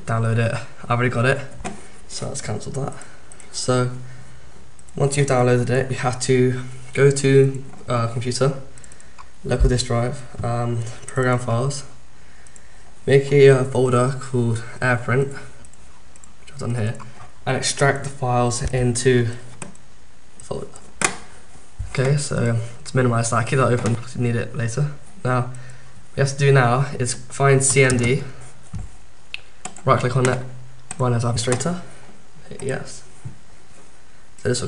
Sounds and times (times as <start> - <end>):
Speech: 0.0 - 4.1, 5.0 - 8.7, 9.4 - 12.0, 13.1 - 15.6, 16.5 - 19.5, 20.4 - 20.8, 21.8 - 25.6, 26.2 - 28.4, 29.8 - 33.1, 34.4 - 34.6.